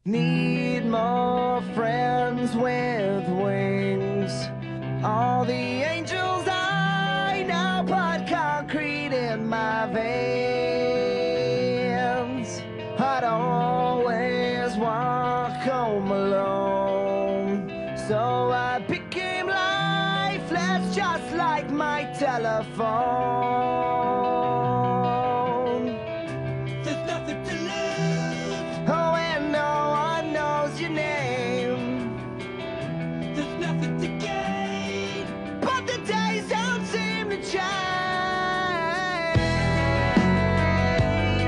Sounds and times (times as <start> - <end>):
Music: 0.0 - 41.4.